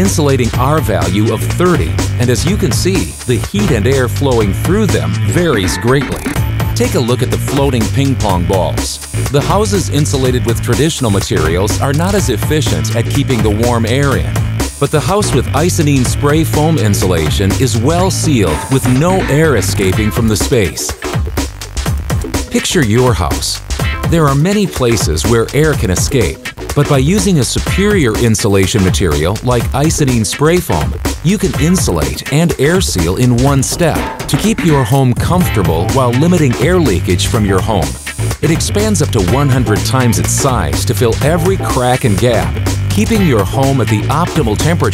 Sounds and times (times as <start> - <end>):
Speech: 0.0 - 21.0, 22.5 - 44.9
Music: 0.0 - 44.9.